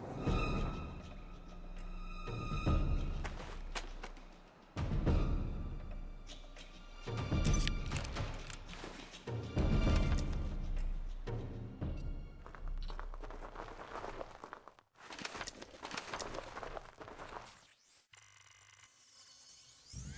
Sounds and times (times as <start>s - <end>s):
Music: 0.0s - 13.0s.